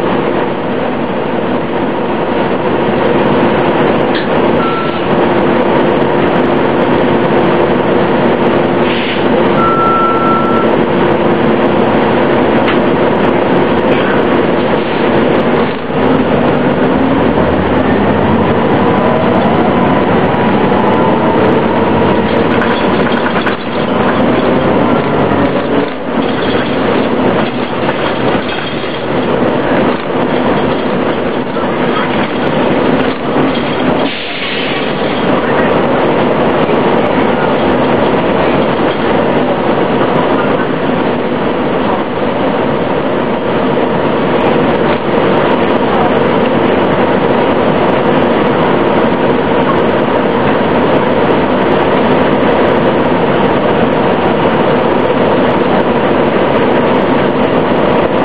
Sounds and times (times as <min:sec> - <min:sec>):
Bus: 0:00.0 - 0:58.2.